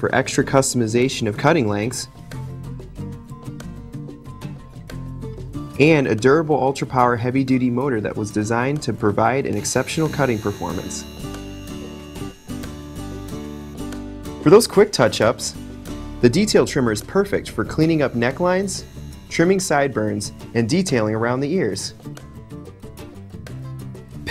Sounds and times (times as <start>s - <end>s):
Speech: 0.0s - 2.1s, 5.8s - 11.1s, 14.4s - 15.6s, 16.2s - 22.0s
Music: 0.0s - 24.3s.